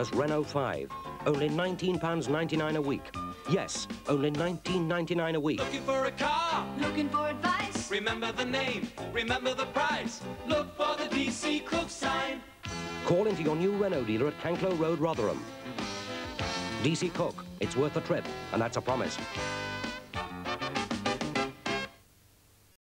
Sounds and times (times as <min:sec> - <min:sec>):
Speech: 0:00.0 - 0:05.6, 0:13.1 - 0:15.4, 0:16.8 - 0:19.3
Music: 0:00.0 - 0:22.1.